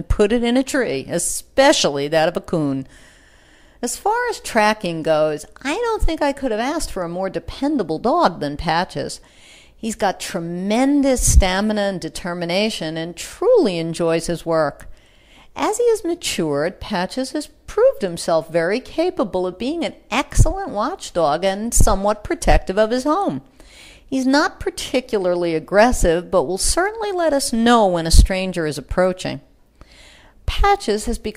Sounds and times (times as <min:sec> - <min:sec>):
Speech: 0:00.0 - 0:02.9, 0:03.8 - 0:09.2, 0:09.8 - 0:14.9, 0:15.6 - 0:23.4, 0:24.1 - 0:29.5, 0:30.5 - 0:31.3.